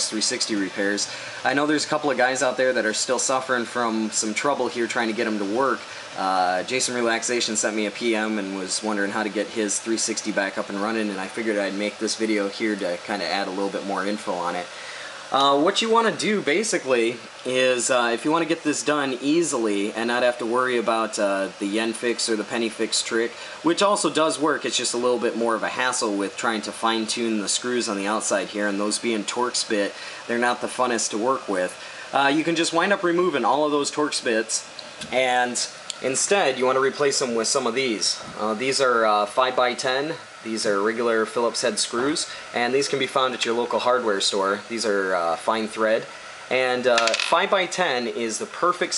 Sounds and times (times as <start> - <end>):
Speech: 0.0 - 14.7, 15.3 - 48.9.